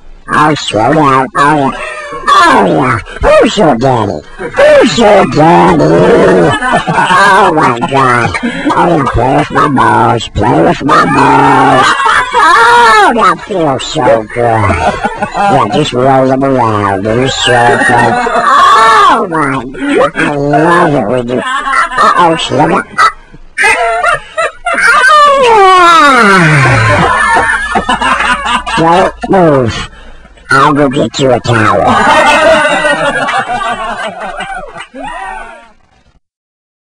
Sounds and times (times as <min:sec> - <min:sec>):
Speech: 0:00.3 - 0:23.0, 0:24.8 - 0:27.3, 0:28.7 - 0:32.4.